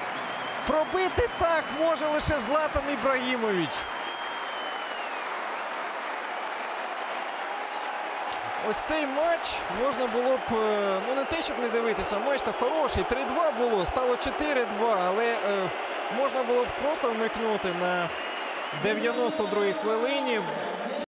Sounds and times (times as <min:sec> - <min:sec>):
Speech: 0:00.7 - 0:03.8, 0:08.6 - 0:18.1, 0:18.8 - 0:21.0.